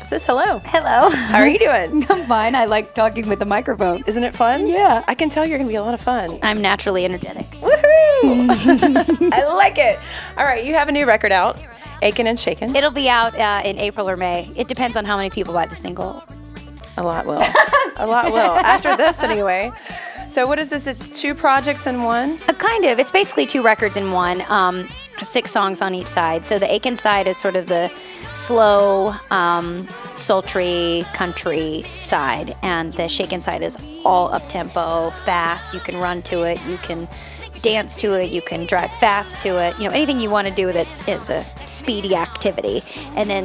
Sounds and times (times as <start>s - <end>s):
Speech: 0.0s - 8.5s, 9.3s - 16.2s
Music: 0.0s - 43.4s.